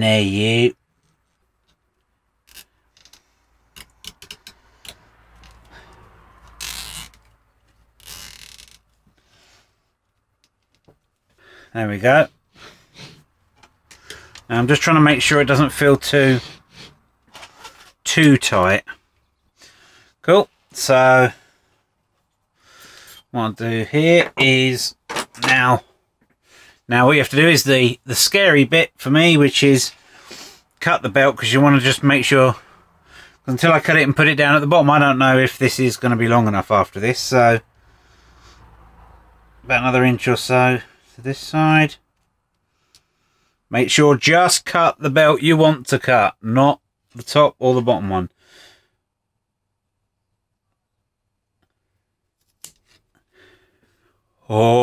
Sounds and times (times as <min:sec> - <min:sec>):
Speech: 0:00.0 - 0:00.8, 0:11.7 - 0:12.3, 0:14.5 - 0:16.4, 0:18.0 - 0:19.0, 0:20.2 - 0:21.4, 0:23.3 - 0:25.8, 0:26.9 - 0:30.0, 0:30.8 - 0:32.6, 0:33.5 - 0:37.6, 0:39.7 - 0:42.0, 0:43.7 - 0:48.3, 0:54.4 - 0:54.8.